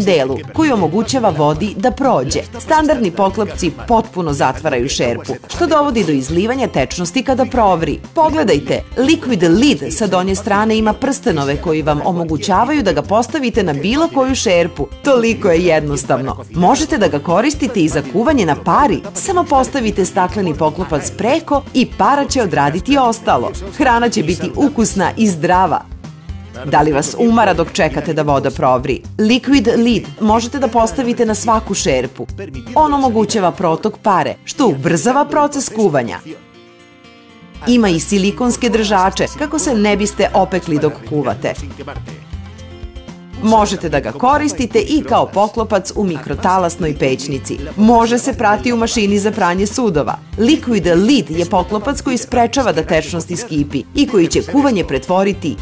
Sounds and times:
Speech: 0:00.0 - 0:25.9, 0:26.6 - 0:36.4, 0:37.6 - 0:42.2, 0:43.4 - 0:55.6
Music: 0:00.0 - 0:55.6.

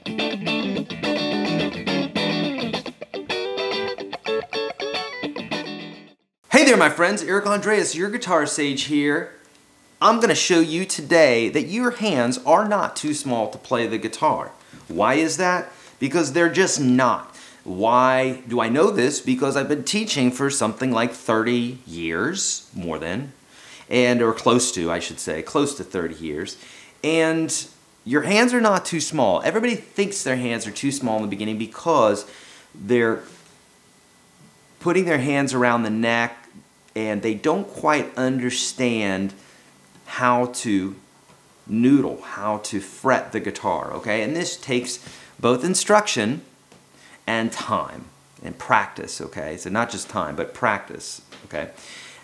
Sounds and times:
Speech: 0:06.5 - 0:09.4, 0:10.0 - 0:33.4, 0:34.8 - 0:39.4, 0:40.0 - 0:41.0, 0:41.7 - 0:46.5, 0:47.3 - 0:51.8.

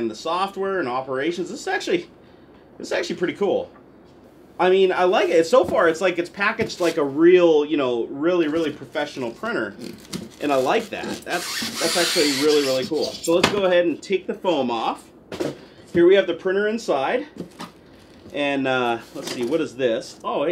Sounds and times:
Speech: 0:00.0 - 0:02.1, 0:02.8 - 0:03.8, 0:04.6 - 0:15.2, 0:16.0 - 0:17.4, 0:18.3 - 0:20.5
Inside, small room: 0:00.0 - 0:20.5.

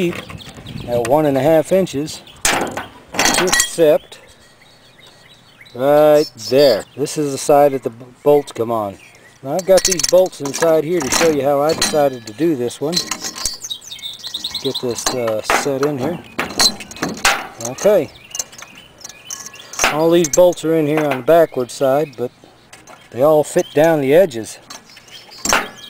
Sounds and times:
Speech: 0:05.8 - 0:13.1, 0:14.6 - 0:16.2, 0:17.6 - 0:18.1, 0:19.9 - 0:22.3, 0:23.1 - 0:24.7.

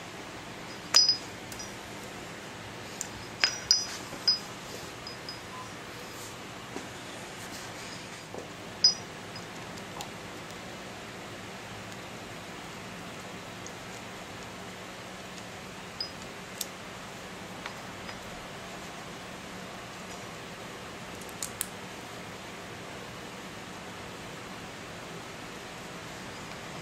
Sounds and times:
Inside, small room: 0:00.0 - 0:26.8.

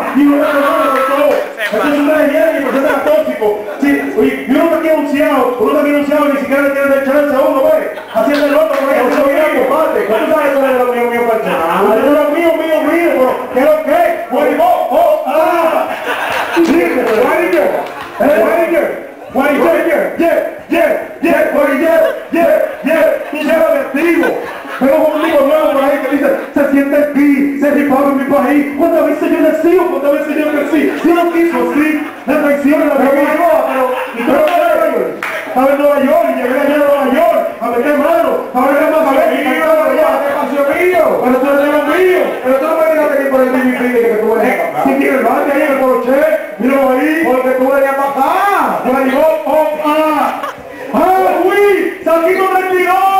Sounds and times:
Speech: 0:00.0 - 0:15.9, 0:16.5 - 0:53.1.

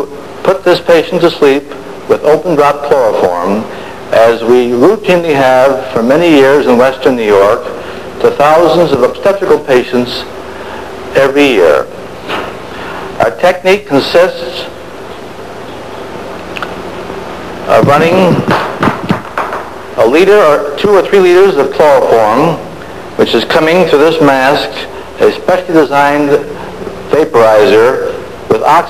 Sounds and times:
Speech: 0:00.0 - 0:10.3, 0:11.1 - 0:11.9, 0:13.2 - 0:14.8, 0:17.7 - 0:18.5, 0:20.0 - 0:28.8.

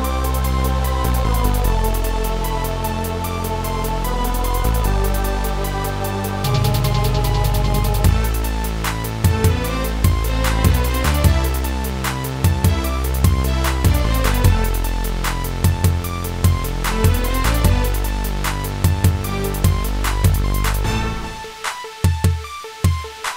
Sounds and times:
Music: 0:00.0 - 0:23.3.

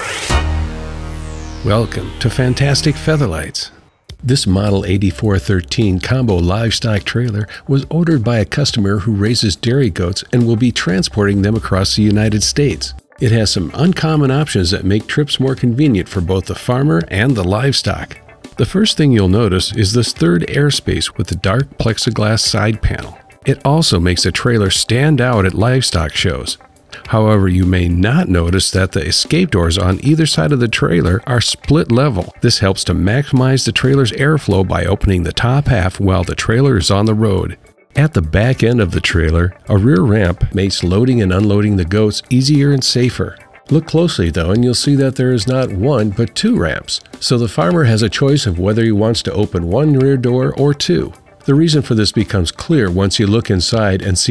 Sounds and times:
Music: 0:00.0 - 0:54.3
Speech: 0:01.6 - 0:54.3.

